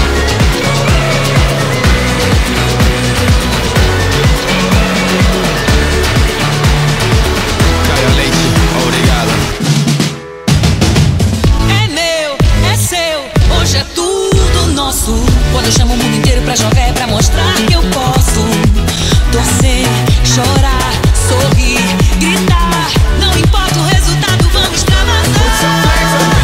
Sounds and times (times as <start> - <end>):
Dance music: 0.0 - 26.4.